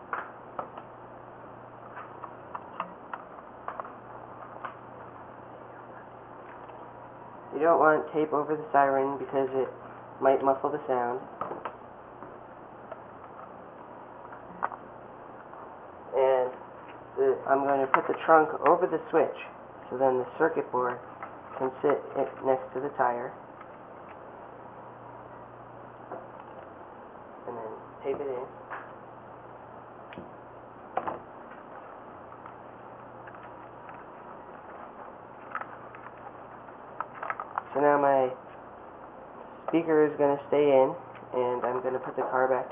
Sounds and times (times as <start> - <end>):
Speech: 7.5 - 11.3, 16.1 - 16.6, 17.2 - 21.0, 21.6 - 23.4, 27.4 - 28.6, 37.7 - 38.4, 39.7 - 42.7.